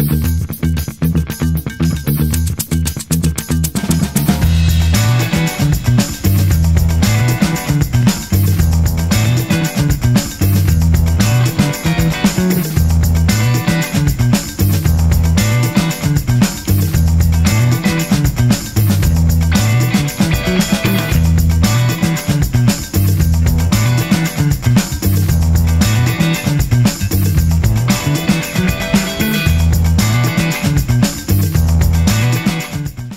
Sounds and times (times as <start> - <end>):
Music: 0.0 - 33.1.